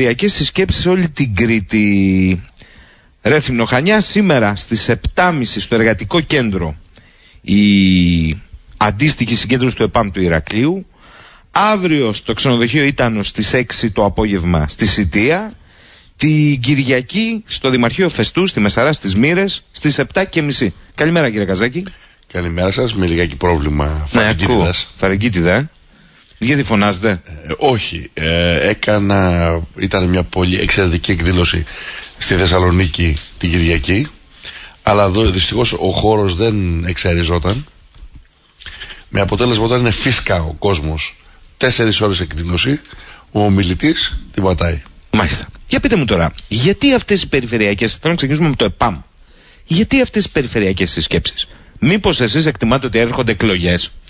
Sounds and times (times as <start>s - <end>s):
Speech: 0.0s - 2.5s, 3.2s - 6.8s, 7.4s - 10.9s, 11.6s - 15.6s, 16.2s - 25.7s, 26.4s - 34.2s, 34.8s - 37.7s, 39.1s - 49.1s, 49.7s - 54.0s.